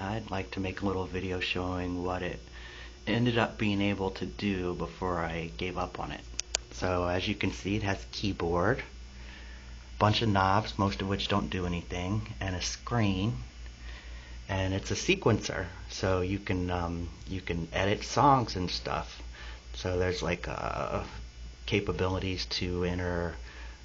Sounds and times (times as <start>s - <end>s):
Speech: 0.0s - 9.0s, 10.0s - 13.5s, 14.5s - 23.4s.